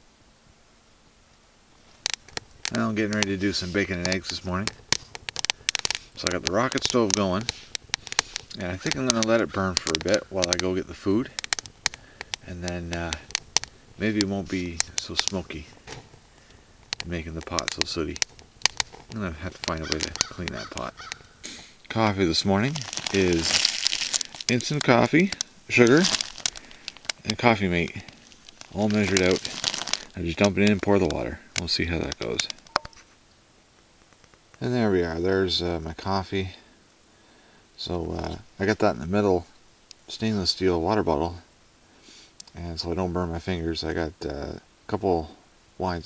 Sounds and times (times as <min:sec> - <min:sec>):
Speech: 0:02.7 - 0:04.8, 0:06.2 - 0:07.5, 0:08.5 - 0:11.4, 0:12.4 - 0:13.3, 0:14.0 - 0:15.7, 0:17.0 - 0:18.2, 0:19.1 - 0:21.0, 0:21.9 - 0:23.7, 0:24.5 - 0:26.2, 0:27.2 - 0:28.1, 0:28.7 - 0:29.5, 0:30.1 - 0:32.6, 0:34.6 - 0:36.6, 0:37.8 - 0:39.5, 0:40.1 - 0:41.5, 0:42.5 - 0:46.0.